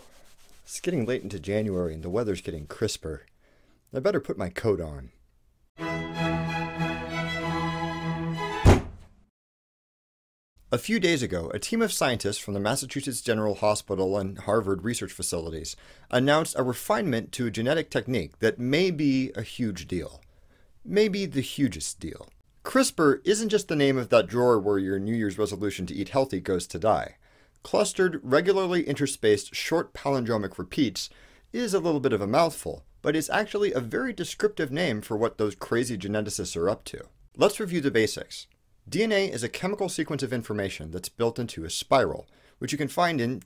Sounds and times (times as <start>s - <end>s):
Speech: 0.7s - 3.3s, 3.9s - 5.2s, 10.7s - 43.4s.